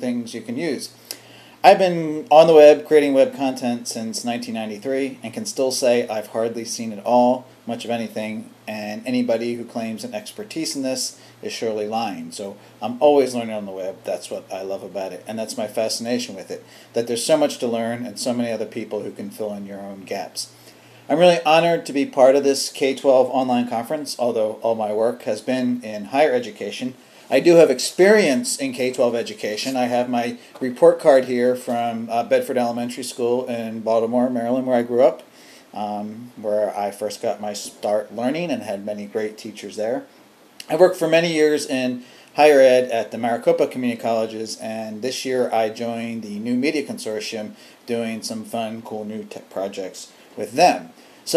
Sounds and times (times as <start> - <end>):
Speech: 0.0 - 1.0, 1.6 - 51.3.